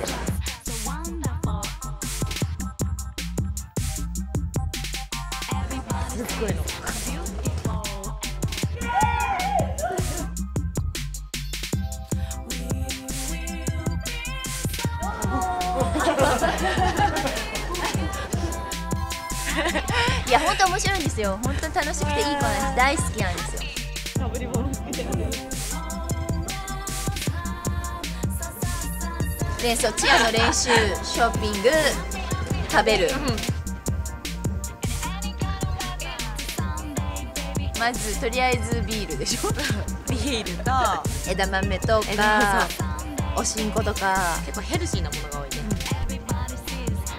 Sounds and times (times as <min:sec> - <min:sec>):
Music: 0:00.0 - 0:47.1
Speech: 0:20.3 - 0:25.5, 0:29.6 - 0:33.6, 0:37.8 - 0:46.2.